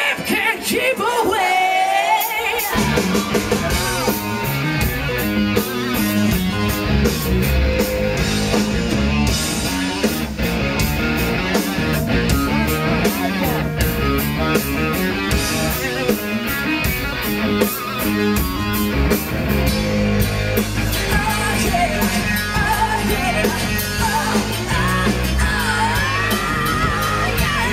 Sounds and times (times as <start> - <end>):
Music: 0.0 - 27.7.